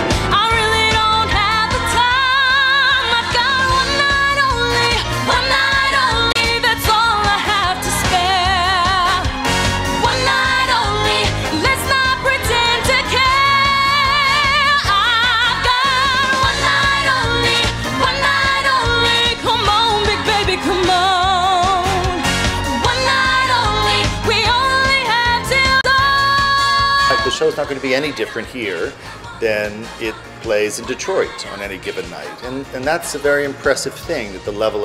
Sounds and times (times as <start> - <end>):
Music: 0.0 - 34.8.